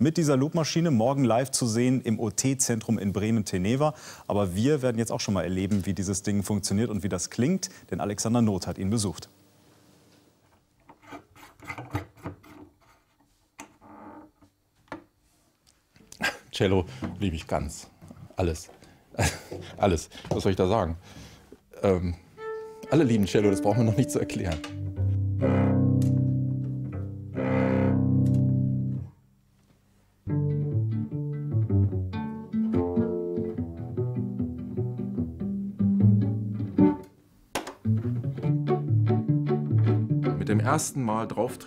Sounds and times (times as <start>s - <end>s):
Speech: 0.0s - 9.3s, 16.5s - 18.8s, 19.7s - 21.0s, 21.8s - 22.2s, 22.9s - 24.7s, 40.4s - 41.6s.